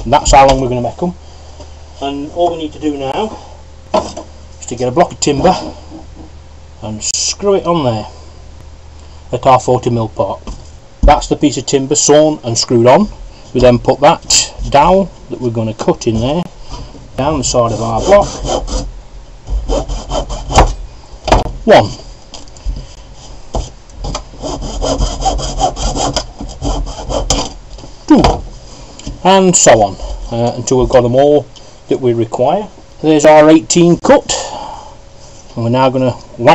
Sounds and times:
Speech: 0.0s - 1.2s, 2.0s - 3.4s, 4.6s - 5.7s, 6.8s - 8.2s, 9.3s - 16.5s, 17.2s - 18.4s, 21.6s - 22.0s, 29.2s - 34.5s, 35.6s - 36.5s.

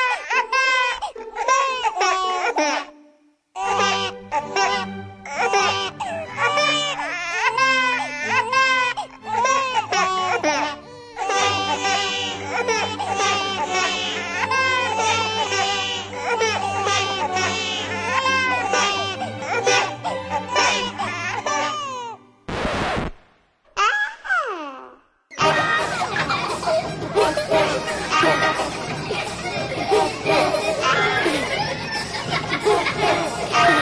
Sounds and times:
Baby cry, infant cry: 0.0s - 2.9s, 3.6s - 22.2s
Music: 2.4s - 22.5s, 25.4s - 33.8s.

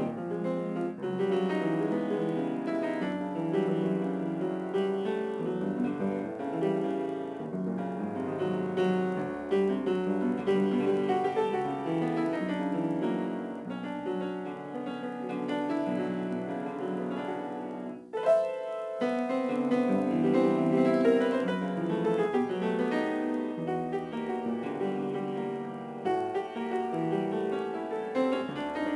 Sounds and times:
Classical music: 0.0s - 28.9s
Piano: 0.0s - 28.9s.

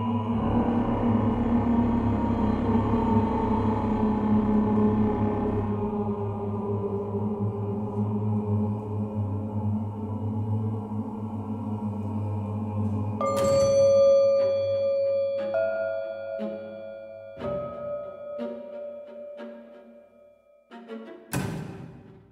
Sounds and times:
Soundtrack music: 13.2s - 22.3s.

